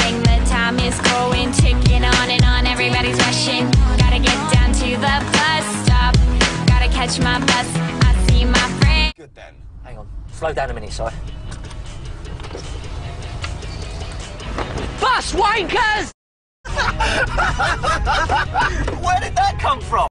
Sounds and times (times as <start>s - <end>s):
Music: 0.0s - 9.2s, 10.8s - 16.1s, 16.7s - 20.1s
Speech: 9.2s - 11.2s, 19.0s - 20.1s
Vehicle: 9.2s - 15.9s.